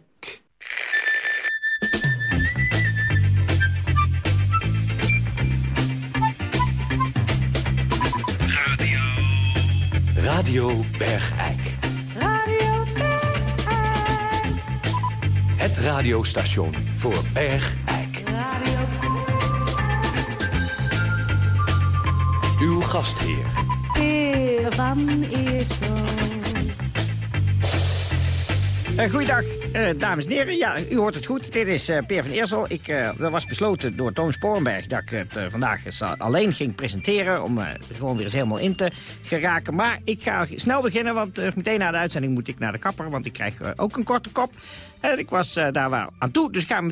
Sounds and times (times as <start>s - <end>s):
Music: 1.4s - 46.9s
Speech: 8.5s - 11.8s, 15.6s - 18.2s, 22.6s - 23.6s, 29.0s - 46.9s.